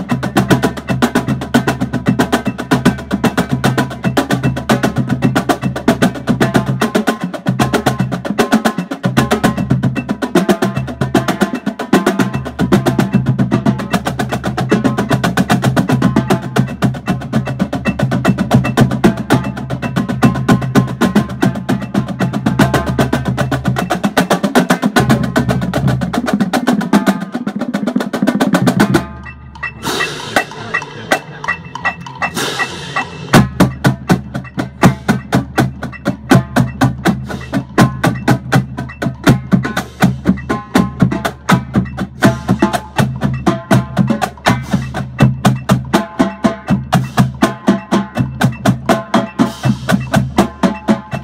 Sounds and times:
Percussion: 0.0s - 51.2s.

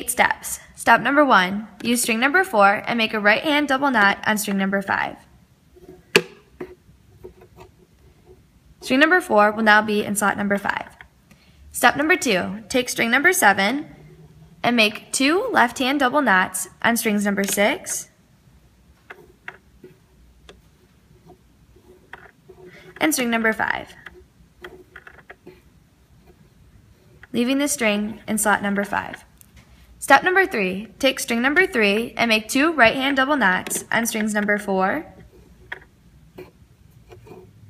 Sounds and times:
Speech: 0.0s - 5.2s, 8.8s - 11.0s, 11.8s - 13.9s, 14.6s - 18.1s, 23.0s - 24.0s, 27.4s - 29.2s, 30.0s - 35.1s.

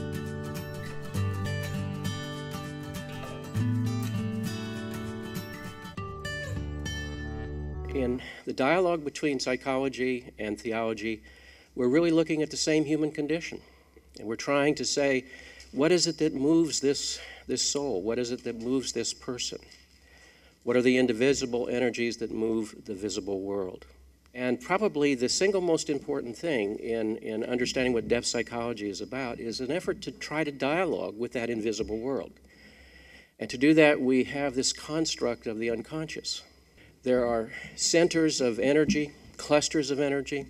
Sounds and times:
Speech: 7.9s - 11.2s, 11.8s - 13.6s, 14.2s - 19.7s, 20.7s - 23.8s, 24.4s - 32.4s, 33.4s - 40.4s.

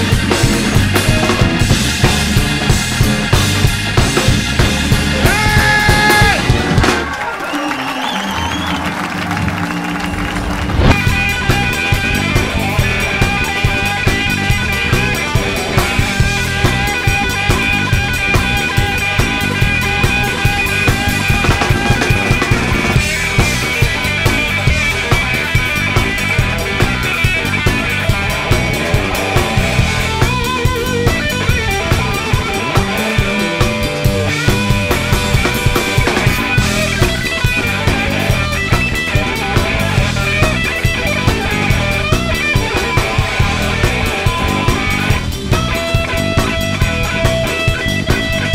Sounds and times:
Psychedelic rock: 0.0s - 7.3s, 10.1s - 48.5s
Blues: 0.0s - 48.5s.

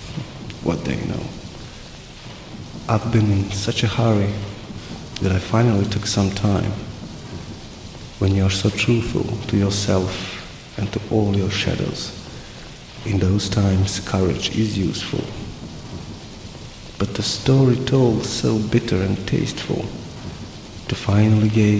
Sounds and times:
Rain on surface: 0.0s - 21.7s
Raindrop: 0.0s - 21.7s.

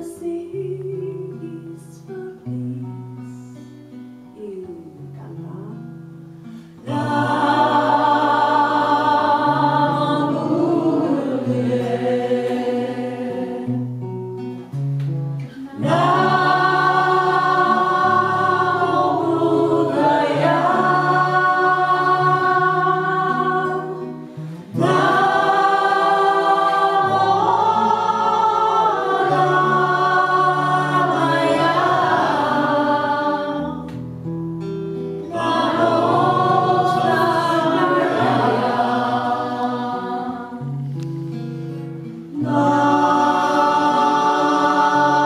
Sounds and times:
Speech: 4.4s - 5.9s
Mantra: 6.8s - 13.8s, 15.4s - 24.0s, 24.6s - 33.9s, 35.3s - 40.7s, 42.3s - 45.2s.

